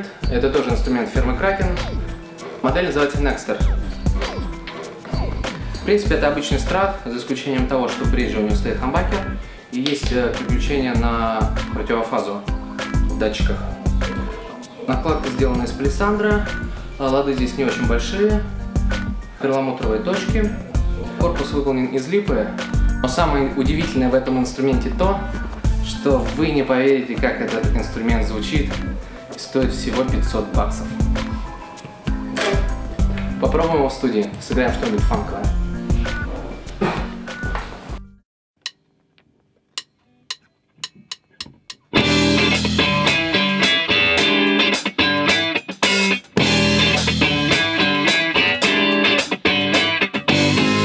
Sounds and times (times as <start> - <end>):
Speech: 0.0 - 2.0, 2.6 - 3.7, 5.8 - 12.5, 13.2 - 18.5, 19.4 - 31.0, 33.4 - 35.6.